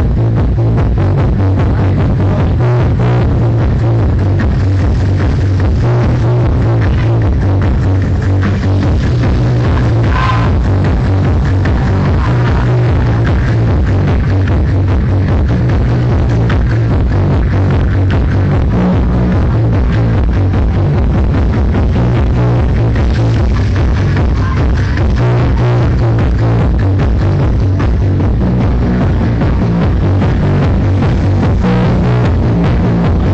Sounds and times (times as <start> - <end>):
Music: 0.0 - 33.3.